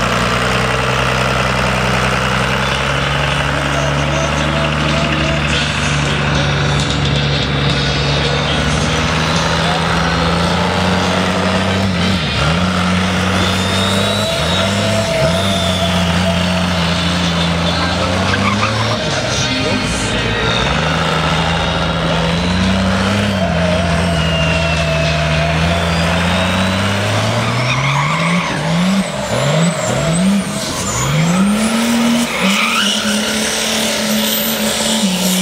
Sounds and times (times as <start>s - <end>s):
Race car, auto racing: 0.0s - 35.4s.